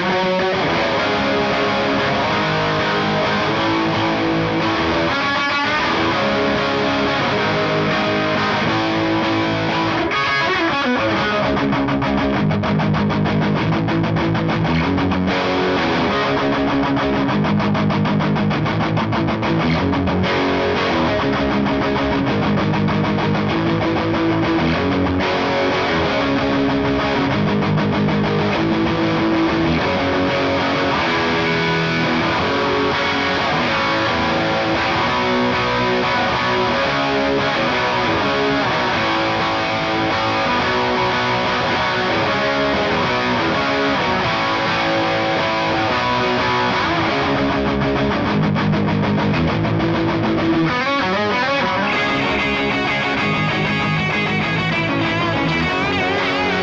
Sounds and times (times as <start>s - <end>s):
Music: 0.0s - 56.6s.